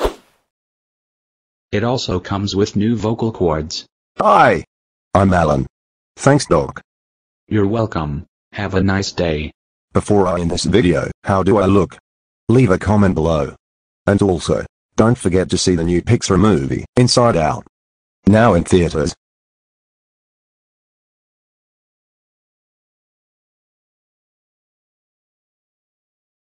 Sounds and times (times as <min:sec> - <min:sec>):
Speech: 0:01.8 - 0:06.9, 0:07.5 - 0:19.2.